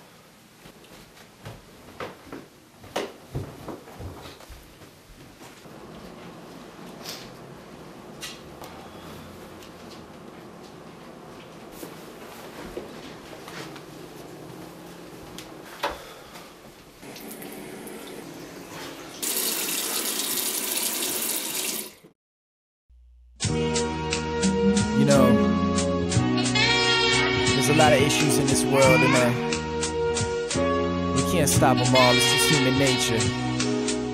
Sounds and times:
Sink (filling or washing): 17.0s - 22.1s
Music: 23.4s - 34.1s
Speech: 25.0s - 25.4s, 27.6s - 29.4s, 31.2s - 33.3s.

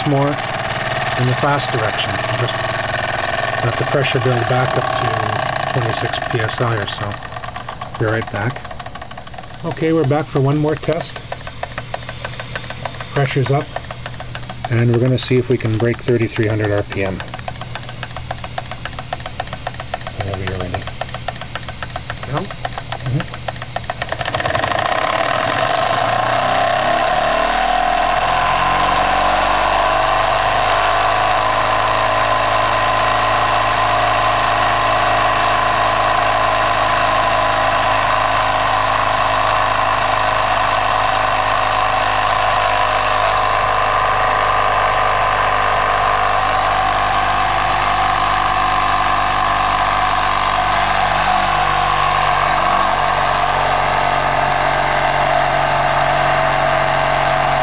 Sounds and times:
Engine: 0.0s - 57.6s
Speech: 1.2s - 2.6s, 3.6s - 7.2s, 8.0s - 8.6s, 9.6s - 11.2s, 13.2s - 13.7s, 14.7s - 17.3s, 20.2s - 20.9s.

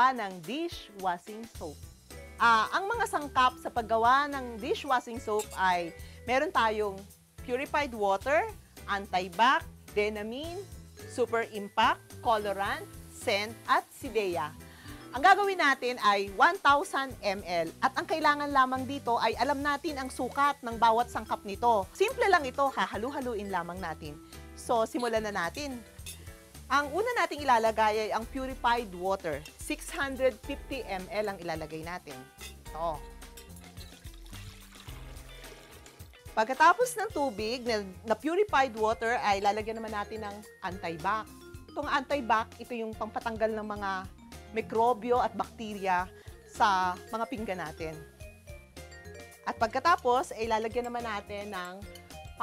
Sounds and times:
Speech: 0.0s - 1.8s, 2.4s - 10.6s, 11.2s - 14.5s, 15.2s - 25.8s, 26.7s - 33.0s, 36.4s - 41.2s, 41.8s - 48.0s, 49.5s - 51.8s
Music: 0.0s - 52.4s.

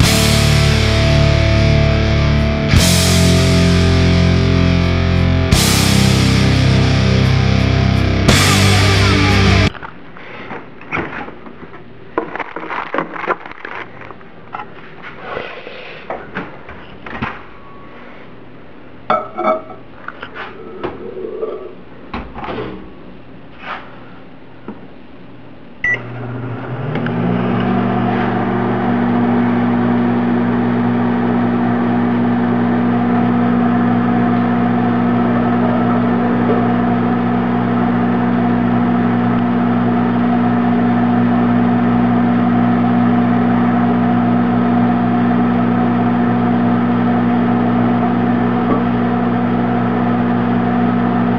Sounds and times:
Beep, bleep: 25.8s - 26.0s
Microwave oven: 25.8s - 51.3s.

